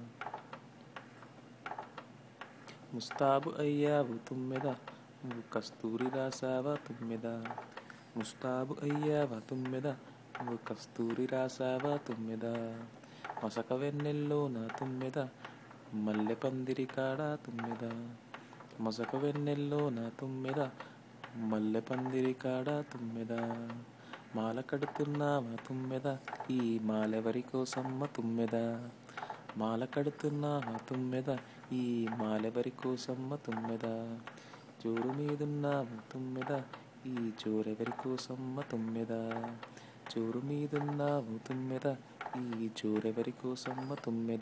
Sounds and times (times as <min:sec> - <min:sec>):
Lullaby: 0:02.6 - 0:44.4.